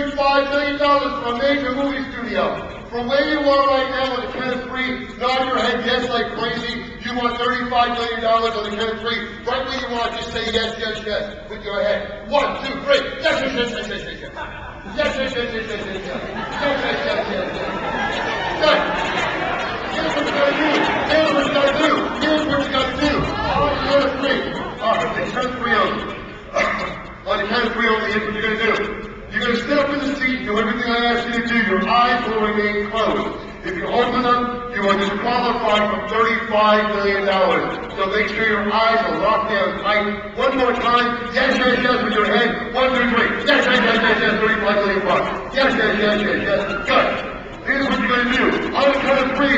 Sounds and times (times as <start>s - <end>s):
Speech: 0.0s - 17.8s, 18.5s - 19.0s, 19.8s - 49.5s
Inside, large room or hall: 0.0s - 49.5s.